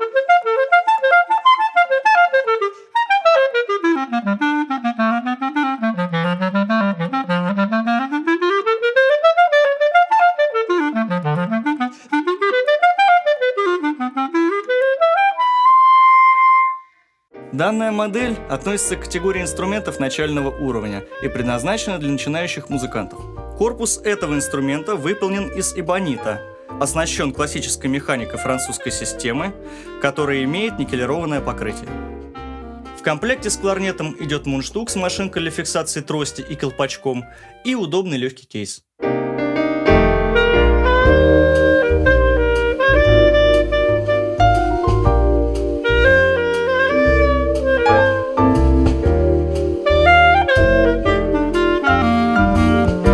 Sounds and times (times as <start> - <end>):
Saxophone: 0.0 - 17.0, 18.3 - 26.8, 27.4 - 34.4, 39.8 - 53.1
Speech: 17.5 - 32.0, 33.0 - 38.9.